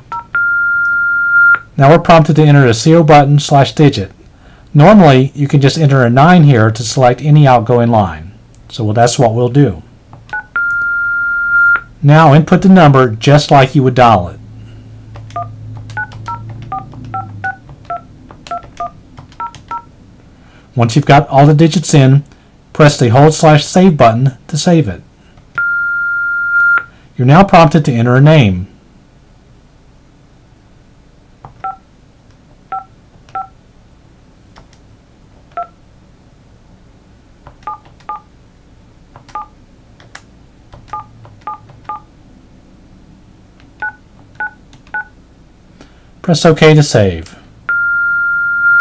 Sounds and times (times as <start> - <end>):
Speech: 1.8 - 9.9, 12.0 - 14.4, 20.8 - 25.1, 27.2 - 28.7, 46.2 - 47.4.